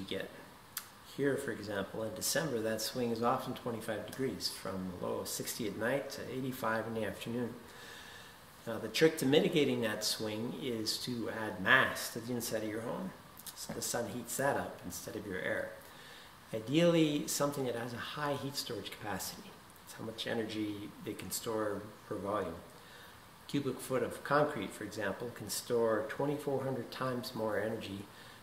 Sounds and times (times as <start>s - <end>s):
Speech: 0.0s - 7.7s, 8.6s - 15.8s, 16.5s - 22.8s, 23.5s - 28.2s.